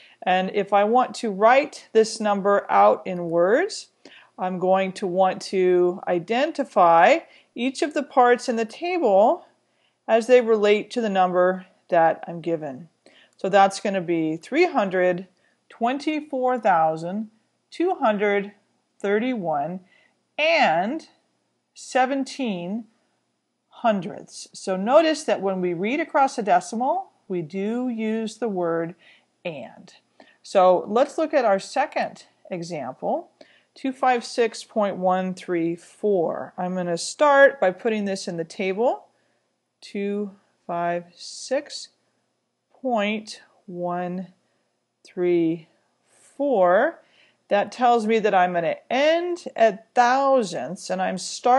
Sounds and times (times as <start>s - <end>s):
Speech: 0.2s - 21.2s, 21.8s - 22.9s, 23.8s - 39.1s, 39.8s - 42.0s, 42.8s - 44.4s, 45.1s - 51.5s.